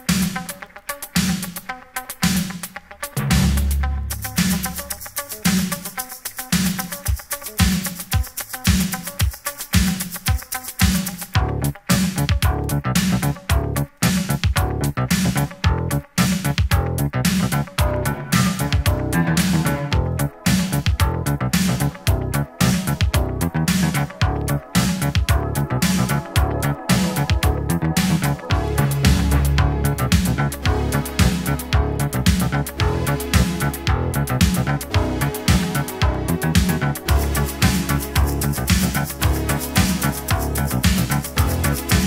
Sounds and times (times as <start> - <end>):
Disco: 0.0 - 42.0.